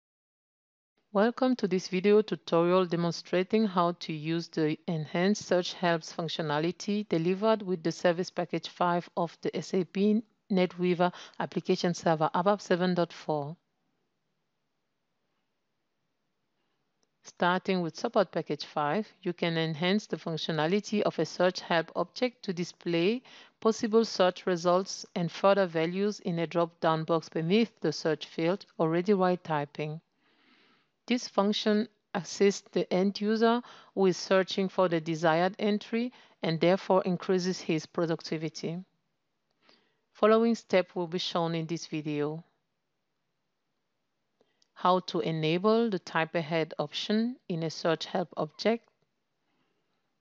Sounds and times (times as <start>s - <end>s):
Speech: 1.2s - 13.6s, 17.3s - 30.0s, 31.1s - 38.9s, 40.2s - 42.4s, 44.8s - 48.9s.